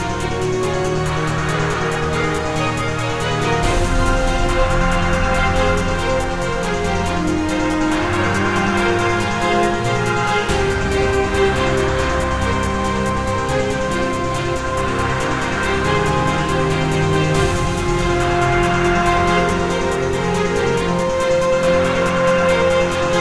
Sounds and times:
Soundtrack music: 0.0s - 23.2s
Theme music: 0.0s - 23.2s.

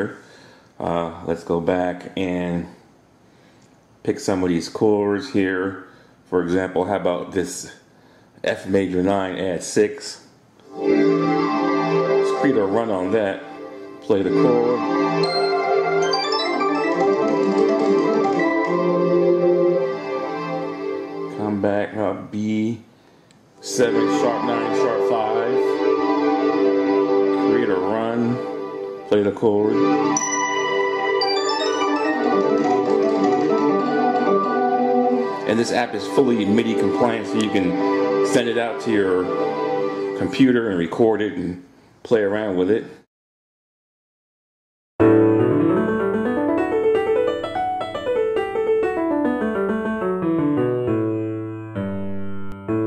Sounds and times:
Electronic organ: 10.6s - 22.4s, 23.6s - 41.4s, 45.0s - 52.8s
Piano: 10.7s - 21.6s, 23.6s - 40.4s, 45.0s - 52.8s.

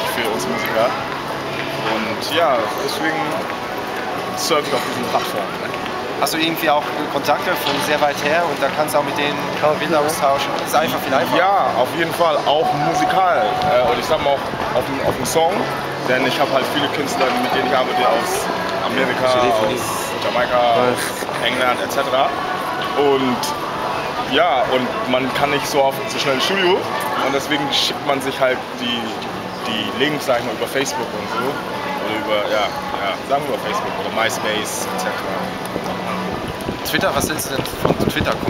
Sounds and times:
Music: 0.0s - 38.4s
Speech: 6.2s - 22.3s.

